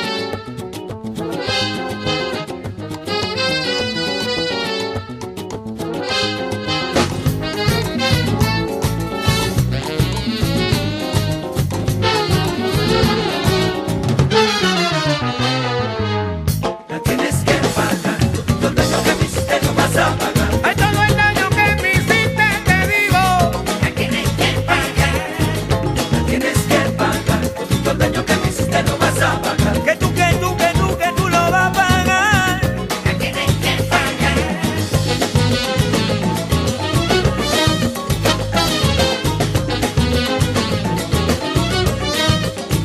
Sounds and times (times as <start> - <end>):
Flamenco: 0.0 - 14.8, 16.5 - 42.8
Salsa music: 0.0 - 42.8.